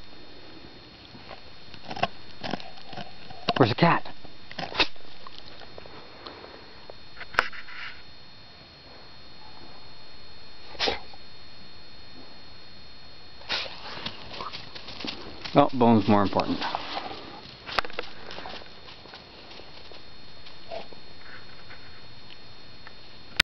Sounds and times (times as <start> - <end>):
Speech: 3.5 - 4.2, 15.5 - 16.8.